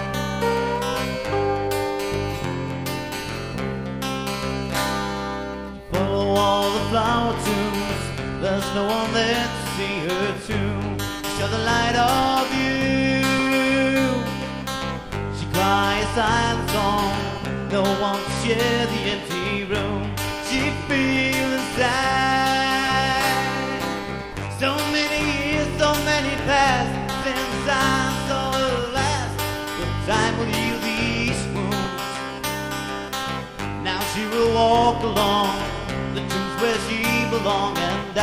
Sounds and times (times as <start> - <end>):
Music: 0.0 - 38.2.